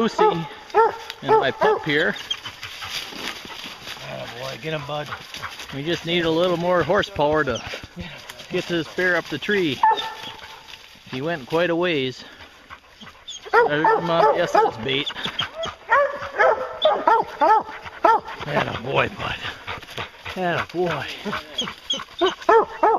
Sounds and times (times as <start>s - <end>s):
Outside, rural or natural: 0.0s - 22.9s
Speech: 1.2s - 2.2s, 11.1s - 12.3s, 13.6s - 15.1s, 18.4s - 19.5s, 20.4s - 21.6s.